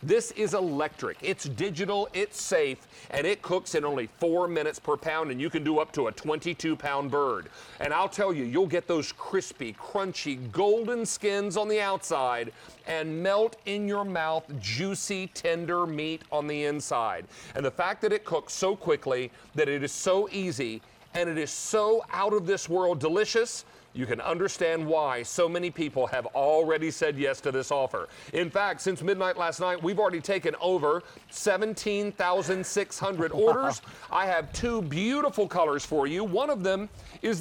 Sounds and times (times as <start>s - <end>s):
Speech: 0.0s - 37.4s.